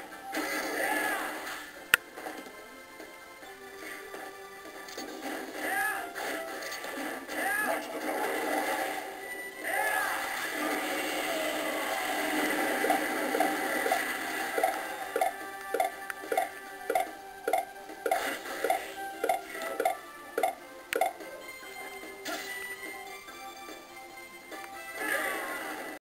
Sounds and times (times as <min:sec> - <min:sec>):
Music: 0:00.0 - 0:26.0.